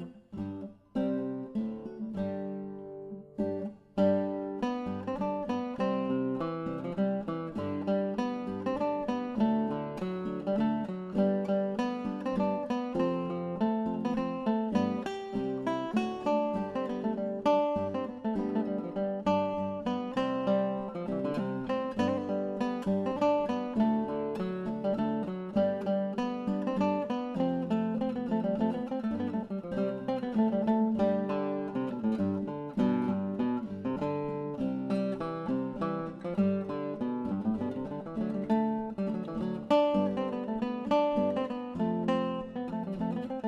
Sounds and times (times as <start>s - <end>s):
Music: 0.0s - 43.4s.